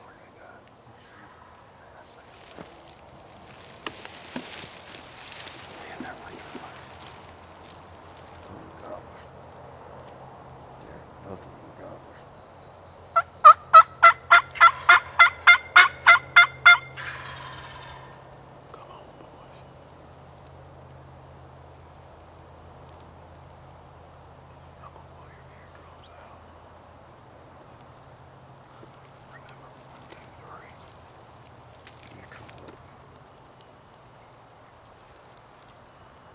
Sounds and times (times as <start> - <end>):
Gobble: 13.2 - 18.2.